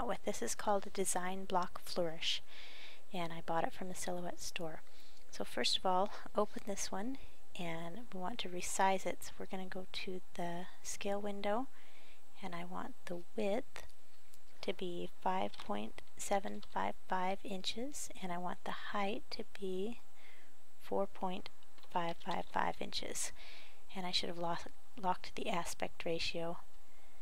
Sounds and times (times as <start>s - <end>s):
Speech: 0.0s - 2.4s, 3.1s - 4.8s, 5.4s - 11.7s, 12.4s - 13.8s, 14.6s - 20.0s, 20.8s - 23.3s, 23.9s - 26.6s.